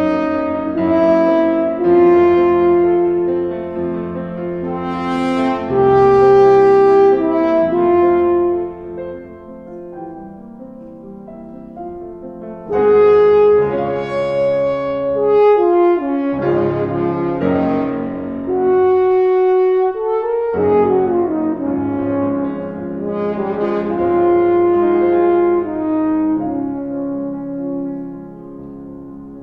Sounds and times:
Piano: 0:00.0 - 0:29.4.

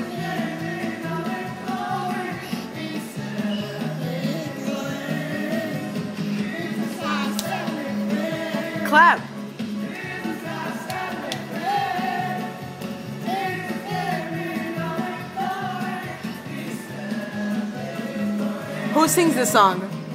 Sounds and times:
Male singing: 0:00.0 - 0:08.9, 0:09.8 - 0:12.6, 0:13.2 - 0:19.6
Music: 0:00.0 - 0:20.1.

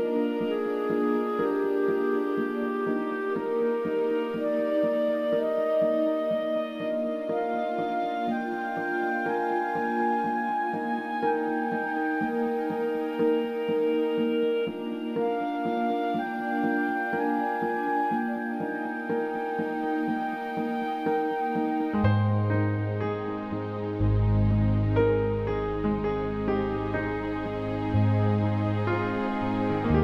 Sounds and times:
Background music: 0:00.0 - 0:30.0.

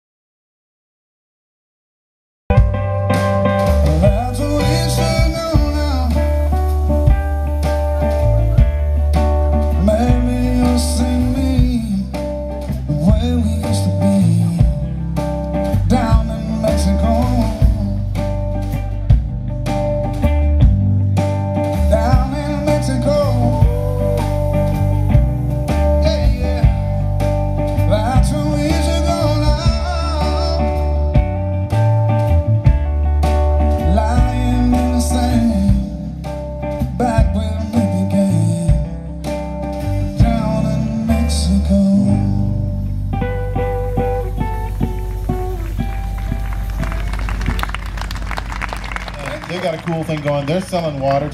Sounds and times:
Music: 0:02.5 - 0:51.3.

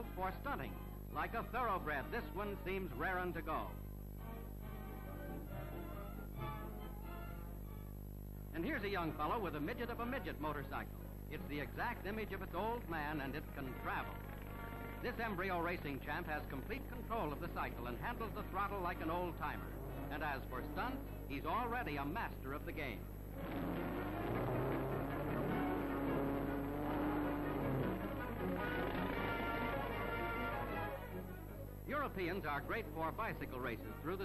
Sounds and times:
Speech: 0:00.0 - 0:03.8, 0:08.6 - 0:14.2, 0:15.0 - 0:23.1, 0:31.9 - 0:34.2
Music: 0:00.0 - 0:34.2.

